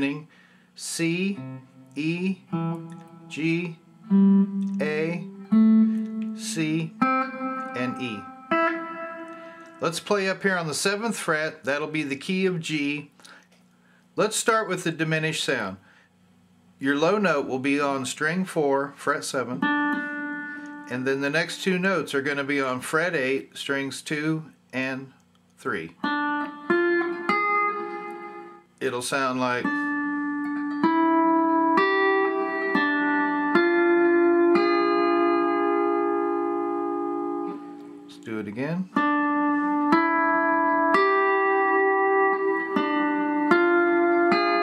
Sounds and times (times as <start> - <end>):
Speech: 0.0 - 1.4, 2.0 - 2.4, 3.4 - 3.8, 4.8 - 5.3, 6.4 - 7.0, 7.8 - 8.2, 9.8 - 13.1, 14.2 - 15.8, 16.8 - 19.7, 20.9 - 26.0, 28.8 - 29.8, 38.1 - 39.0
Steel guitar, slide guitar: 1.1 - 10.4, 19.5 - 22.0, 26.1 - 28.6, 29.6 - 38.2, 39.0 - 44.6.